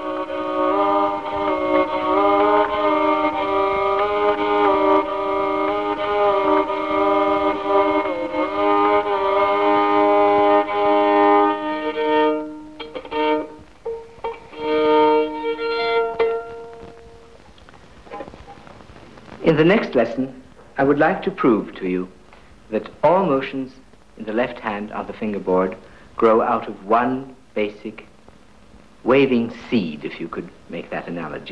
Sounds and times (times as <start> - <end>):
Violin, fiddle: 0.0 - 17.4
Speech: 19.4 - 28.1, 29.0 - 31.5.